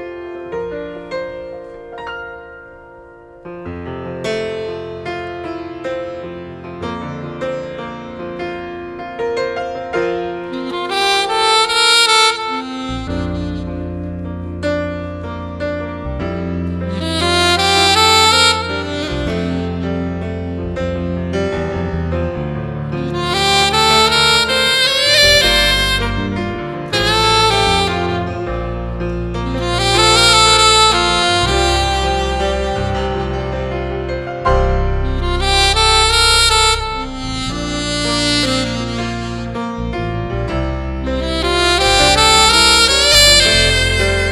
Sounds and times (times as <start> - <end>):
Piano: 0.0 - 44.3
Saxophone: 9.5 - 44.3
Tender music: 10.2 - 44.3.